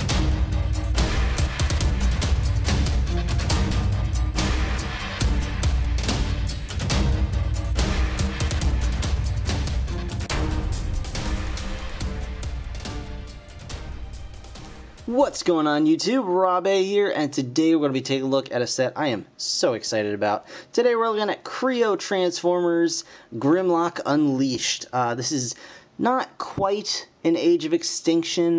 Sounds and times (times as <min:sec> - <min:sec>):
Speech: 0:15.1 - 0:28.5.